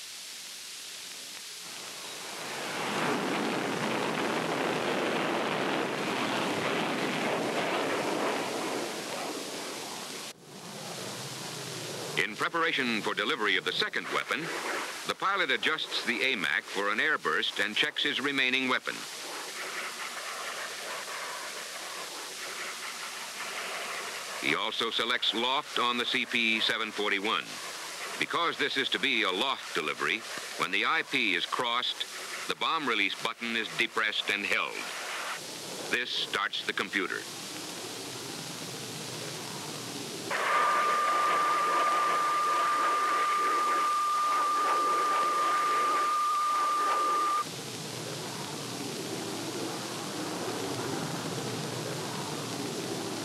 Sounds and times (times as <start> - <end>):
Pink noise: 0.0 - 53.2
Fixed-wing aircraft, airplane: 2.4 - 12.2, 47.6 - 53.2
Speech: 12.2 - 14.5, 15.1 - 19.0, 24.4 - 27.6, 28.2 - 34.9, 35.9 - 37.3.